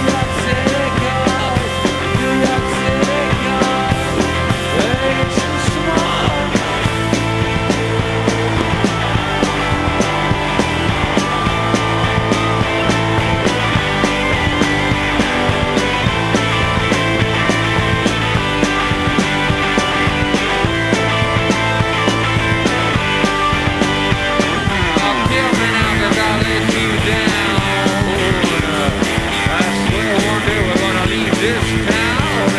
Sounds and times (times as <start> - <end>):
Grunge: 0.0 - 32.5.